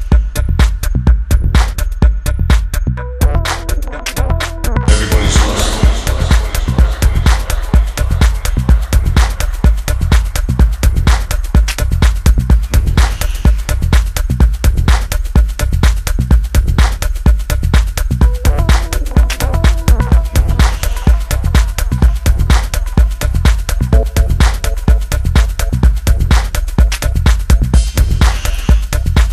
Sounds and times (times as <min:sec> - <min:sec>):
Music: 0:00.0 - 0:29.3.